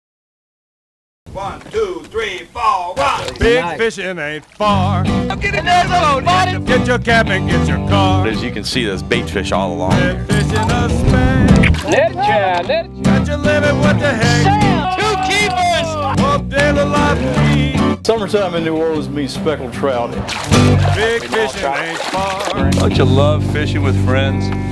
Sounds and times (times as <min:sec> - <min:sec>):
Speech: 0:01.4 - 0:04.4, 0:05.3 - 0:06.5, 0:08.2 - 0:10.0, 0:14.2 - 0:16.2, 0:18.1 - 0:20.2, 0:21.2 - 0:24.5
Music: 0:04.6 - 0:24.7.